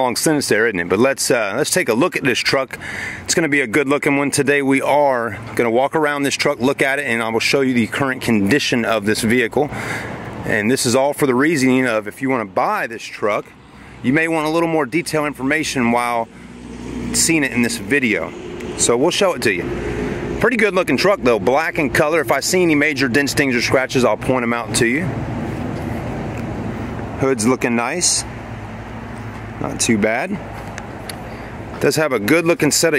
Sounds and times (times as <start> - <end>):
Speech: 0.0 - 9.7, 10.4 - 16.3, 17.1 - 19.7, 20.4 - 25.2, 27.2 - 28.3, 29.6 - 30.5, 31.8 - 32.9
Vehicle: 0.0 - 32.9.